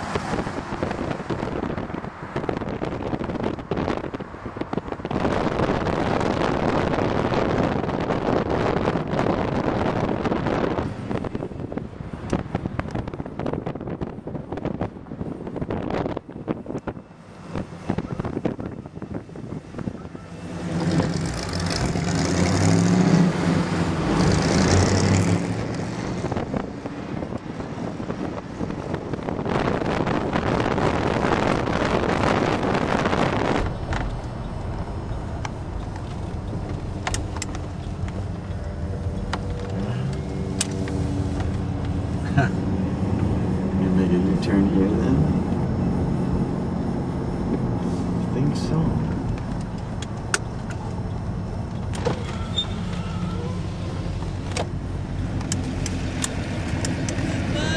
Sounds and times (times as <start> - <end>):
Car: 0.0 - 57.7.